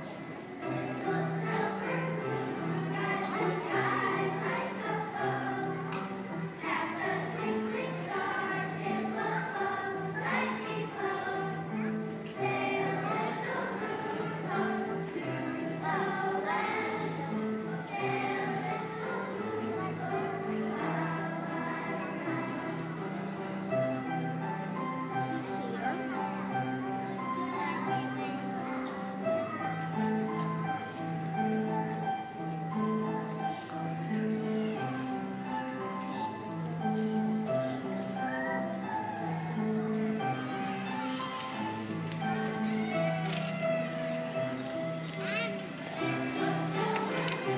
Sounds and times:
Music: 0.0s - 47.5s.

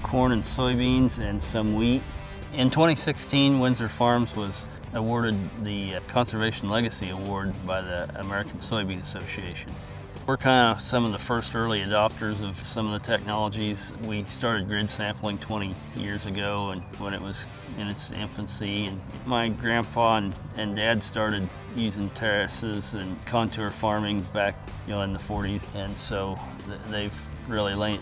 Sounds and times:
Speech: 0.0s - 9.7s, 10.3s - 28.0s
Music: 0.0s - 28.0s.

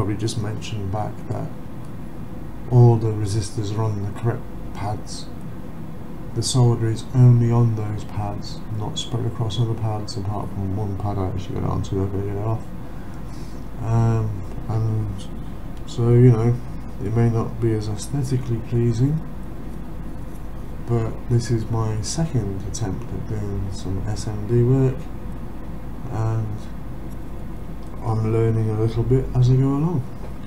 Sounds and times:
Speech: 0.0s - 1.6s, 2.7s - 5.3s, 6.3s - 12.7s, 13.8s - 19.3s, 20.9s - 25.1s, 26.0s - 26.7s, 28.0s - 30.2s.

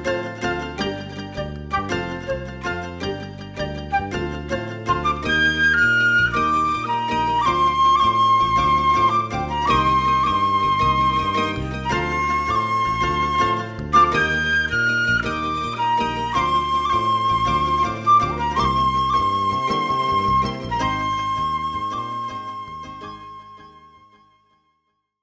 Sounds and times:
Flute: 0.0s - 24.5s.

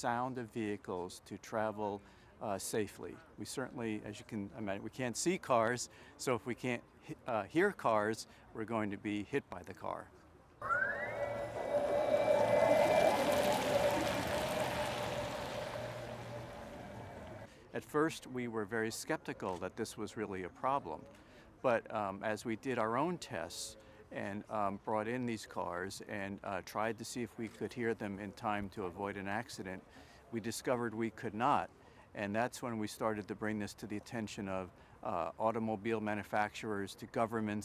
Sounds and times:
Speech: 0.0s - 10.2s, 17.7s - 37.6s.

